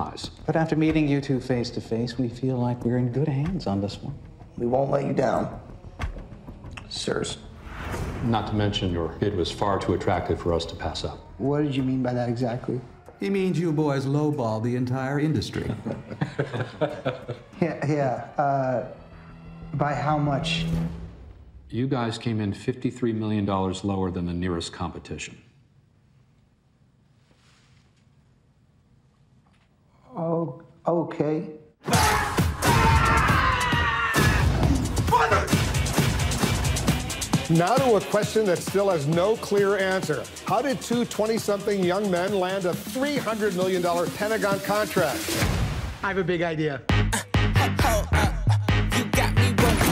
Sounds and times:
Music: 0:00.0 - 0:21.8, 0:31.8 - 0:49.9.

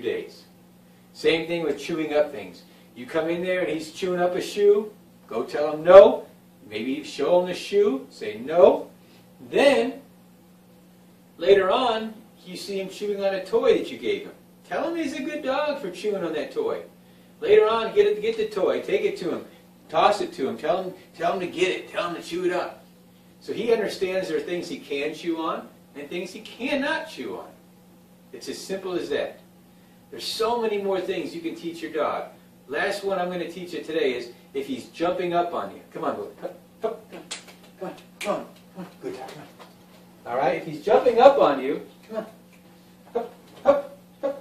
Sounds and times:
Speech: 0:00.0 - 0:00.5, 0:01.2 - 0:10.1, 0:11.4 - 0:22.8, 0:23.4 - 0:27.6, 0:28.3 - 0:29.5, 0:30.1 - 0:39.6, 0:40.2 - 0:42.4.

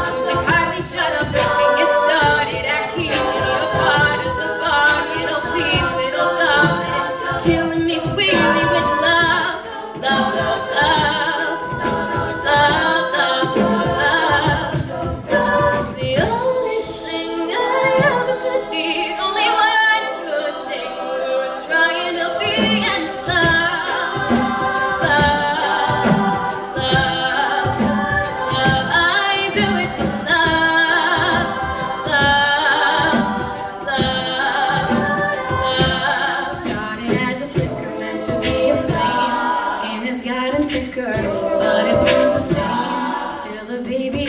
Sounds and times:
A capella: 0:00.0 - 0:44.2
Choir: 0:00.0 - 0:44.2
Crowd: 0:00.0 - 0:44.2.

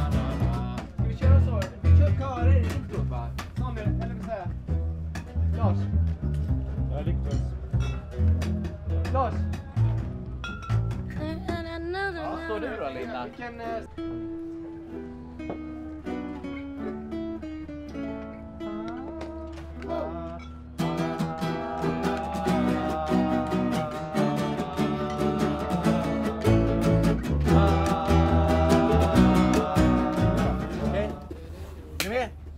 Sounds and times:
Music: 0:00.0 - 0:31.4.

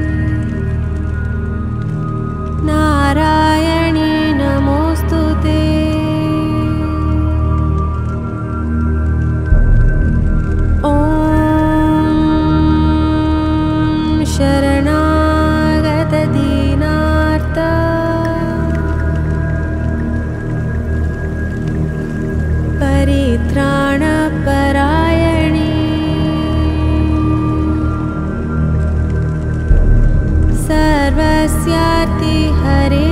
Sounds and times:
Mantra: 0:02.6 - 0:08.0, 0:10.8 - 0:19.8, 0:22.8 - 0:28.4, 0:30.6 - 0:33.1.

